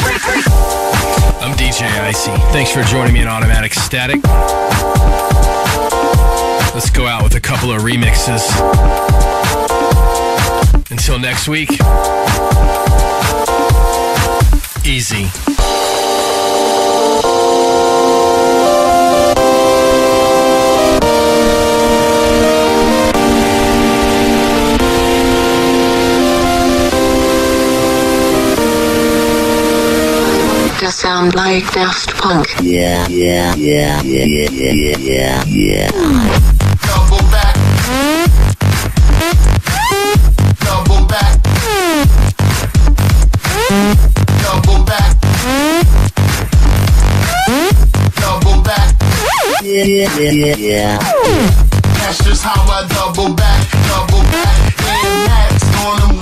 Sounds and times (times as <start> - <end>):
Music: 0.0 - 56.2.